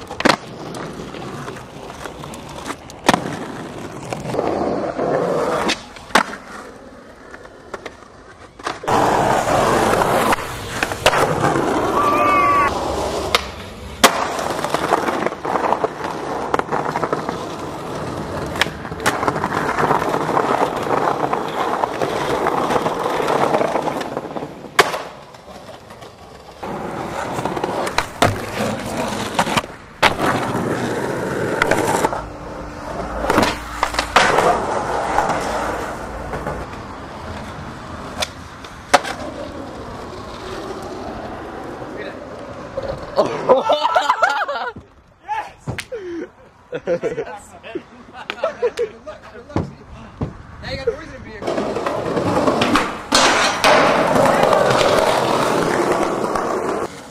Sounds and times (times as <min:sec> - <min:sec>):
Skateboard: 0:00.0 - 0:46.0, 0:51.4 - 0:57.1.